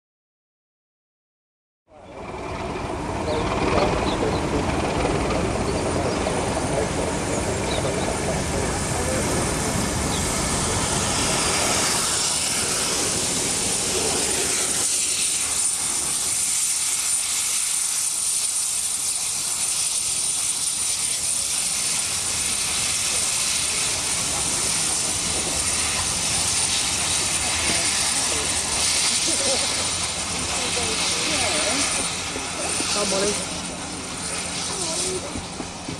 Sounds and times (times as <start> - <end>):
Train: 1.9 - 36.0.